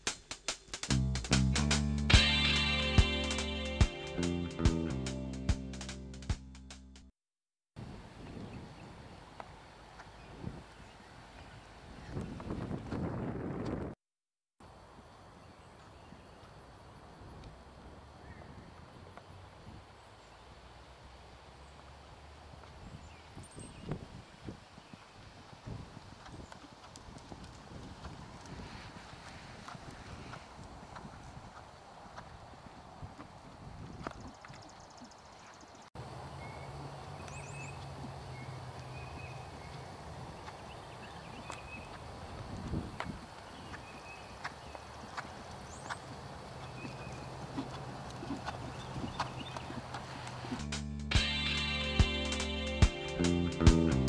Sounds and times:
Clip-clop: 8.3s - 14.0s, 15.6s - 35.9s, 36.5s - 50.7s.

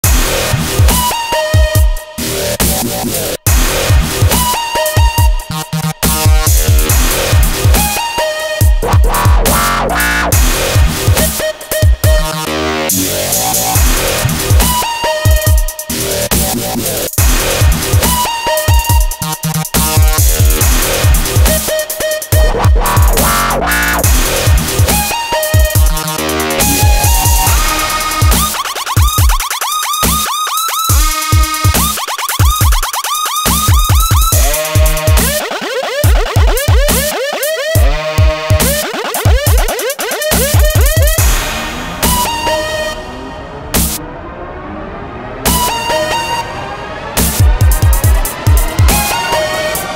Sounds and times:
Music: 0.0s - 49.9s.

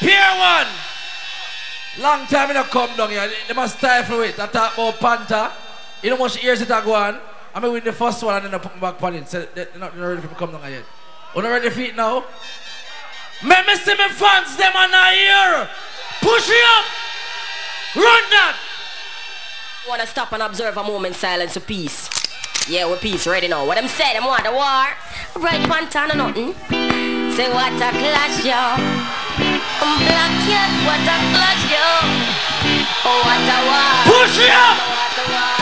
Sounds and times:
Speech: 2.0s - 12.3s, 13.4s - 16.9s, 19.9s - 22.1s, 22.7s - 26.7s
Music: 25.6s - 35.6s.

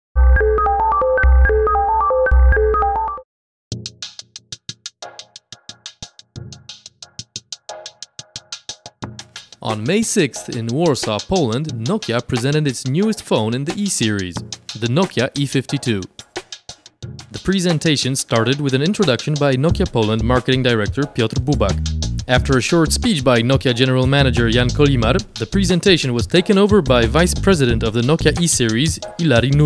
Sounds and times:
Music: 0.2s - 29.6s
Speech: 9.6s - 16.1s, 17.4s - 29.6s.

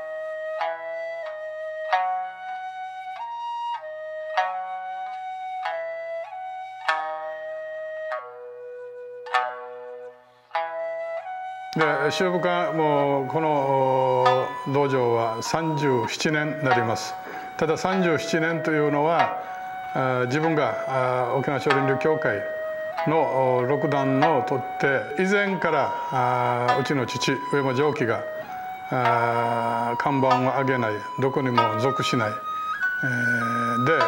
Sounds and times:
Flute: 0.0s - 34.0s.

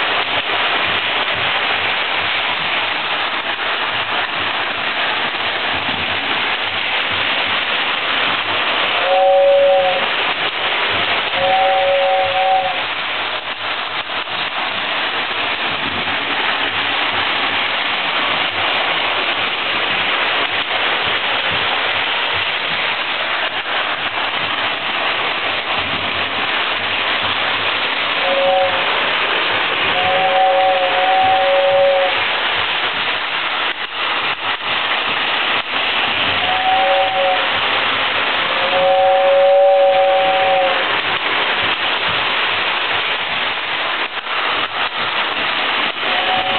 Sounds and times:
Engine: 0.0s - 46.5s.

